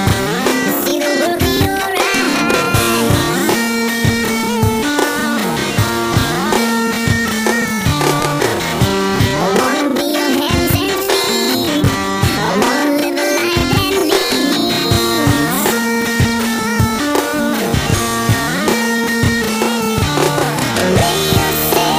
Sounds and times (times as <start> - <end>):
Music: 0.0 - 21.9.